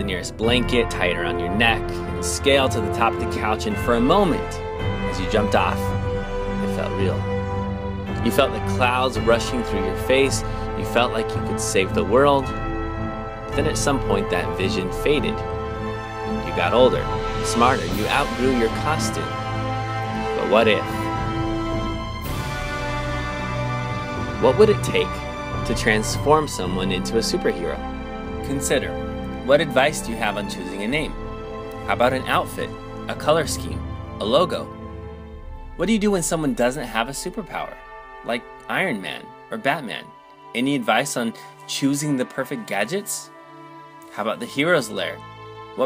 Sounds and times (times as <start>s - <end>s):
Speech: 0.0s - 5.9s, 6.7s - 7.3s, 8.2s - 12.6s, 13.6s - 15.4s, 16.4s - 19.4s, 20.3s - 21.1s, 24.4s - 27.8s, 28.5s - 31.2s, 31.8s - 34.7s, 35.8s - 43.3s, 44.1s - 45.2s
Music: 0.0s - 45.8s.